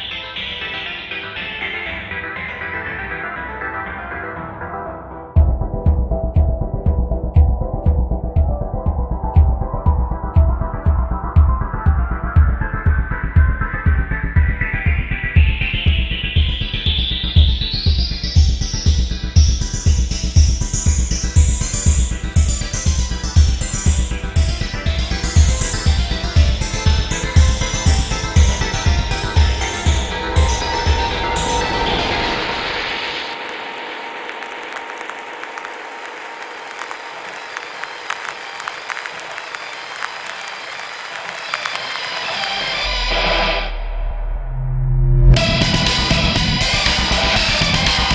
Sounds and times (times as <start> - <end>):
Techno: 0.0 - 44.3, 45.3 - 48.1.